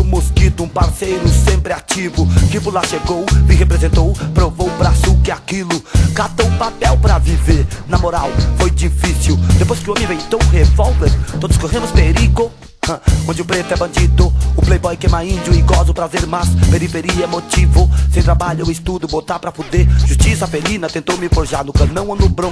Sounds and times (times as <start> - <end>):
Music: 0.0 - 22.5.